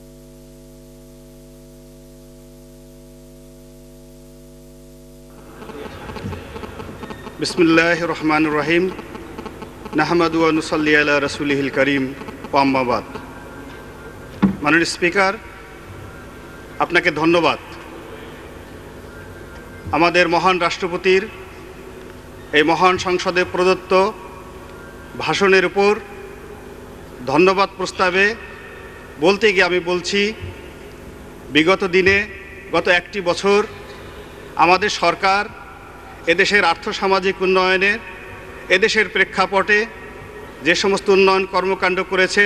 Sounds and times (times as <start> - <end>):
Narration, monologue: 5.1 - 42.4
Male speech, man speaking: 7.4 - 9.0, 10.0 - 13.1, 14.6 - 15.4, 16.8 - 17.8, 19.8 - 21.4, 22.6 - 24.2, 25.2 - 26.0, 27.2 - 28.5, 29.2 - 30.4, 31.5 - 33.8, 34.6 - 35.6, 36.2 - 39.9, 40.6 - 42.4.